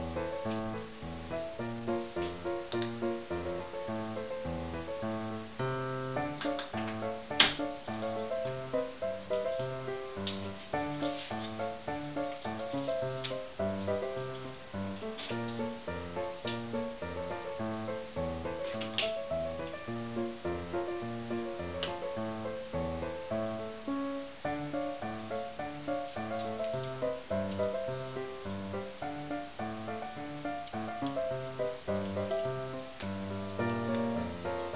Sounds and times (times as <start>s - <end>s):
Music: 0.0s - 34.7s.